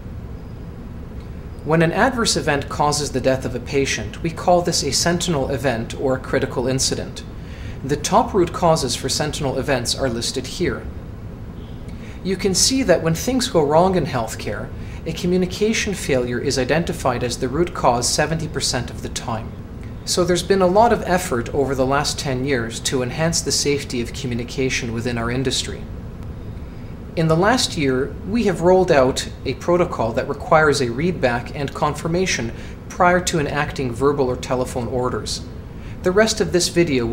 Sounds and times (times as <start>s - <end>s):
Speech: 1.7s - 10.9s, 12.2s - 25.9s, 27.2s - 37.1s.